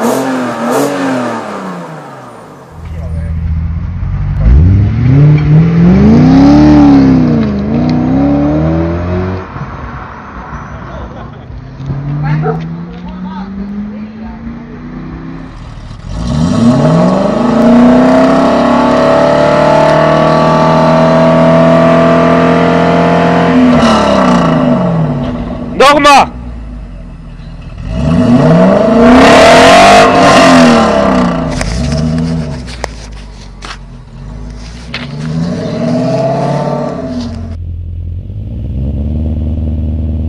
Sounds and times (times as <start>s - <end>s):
Speech: 2.8s - 3.4s, 12.2s - 14.8s, 25.8s - 26.4s.